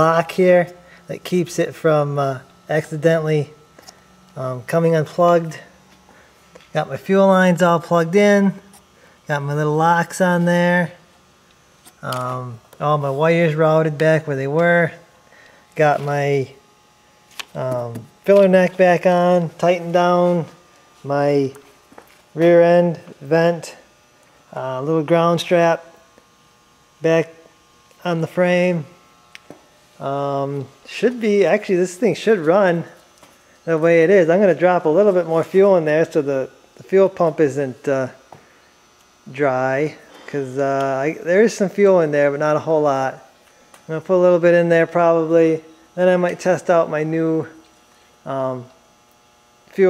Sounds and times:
Speech: 0.0 - 3.6, 4.4 - 5.8, 6.7 - 8.7, 9.3 - 11.0, 12.0 - 15.0, 15.8 - 16.6, 17.5 - 21.6, 22.4 - 23.9, 24.5 - 26.0, 27.0 - 27.4, 28.0 - 29.0, 30.0 - 33.0, 33.7 - 38.2, 39.2 - 43.3, 43.9 - 47.6, 48.2 - 48.8.

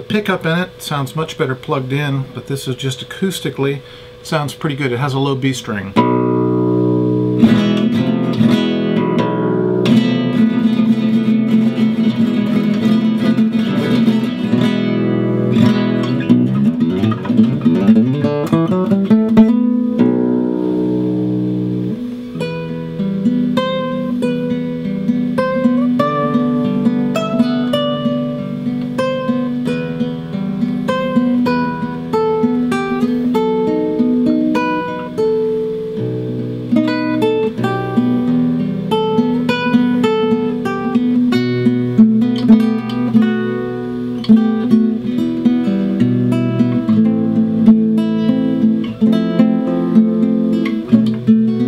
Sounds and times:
Strum: 0.0 - 51.6.

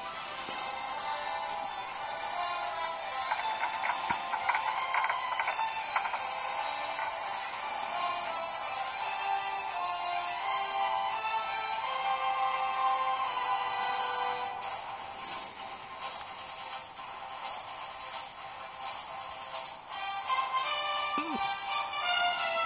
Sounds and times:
Music: 0.0 - 22.6.

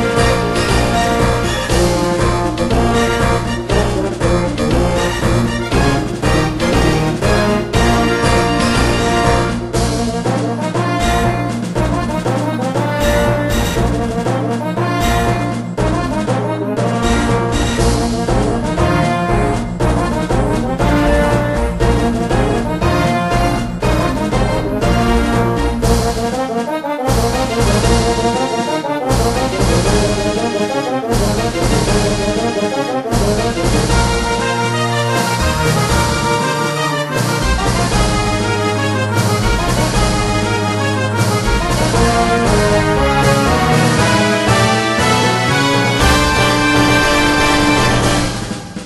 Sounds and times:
Theme music: 0.0 - 48.8.

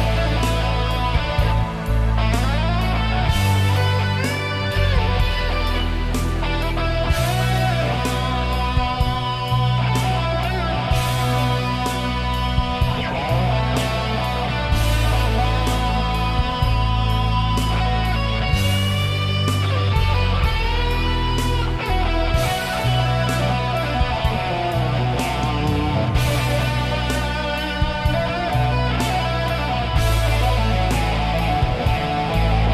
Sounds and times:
Electric guitar: 0.0 - 32.7.

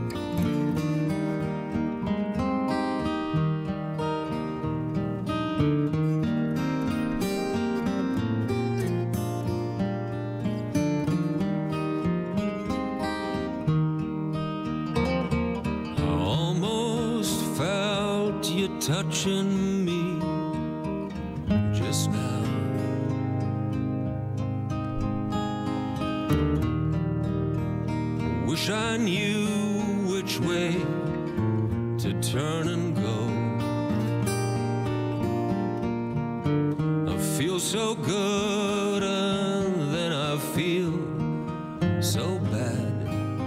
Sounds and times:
Music: 0.0 - 43.4.

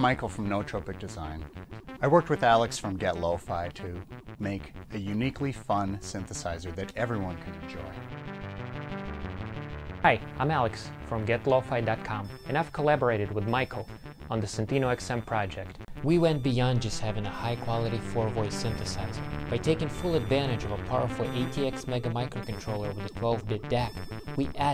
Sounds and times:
Speech: 0.0 - 1.4, 2.0 - 8.0, 10.0 - 24.7
Music: 0.0 - 24.7.

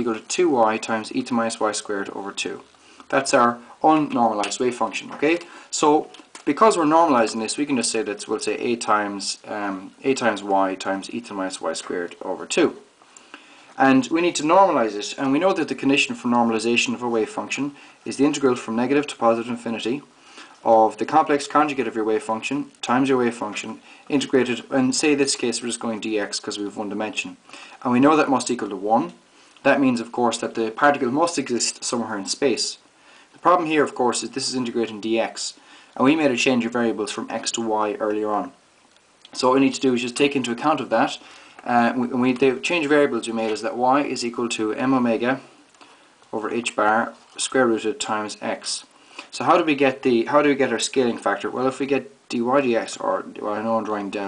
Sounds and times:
Speech: 0.0 - 12.9, 13.8 - 38.6, 39.3 - 45.5, 46.3 - 54.2.

